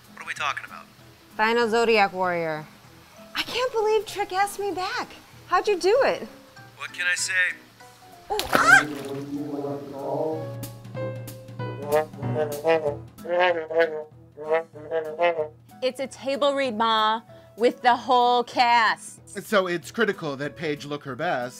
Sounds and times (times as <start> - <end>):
Music: 0.0 - 21.5.